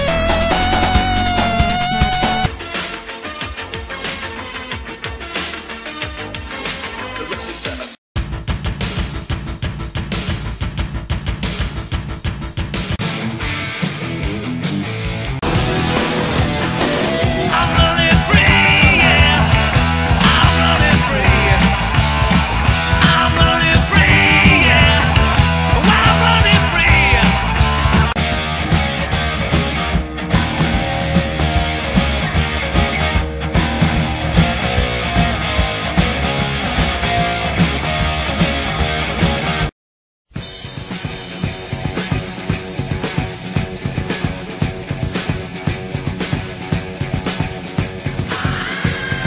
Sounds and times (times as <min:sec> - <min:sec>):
Music: 0:00.0 - 0:39.7, 0:40.3 - 0:49.2.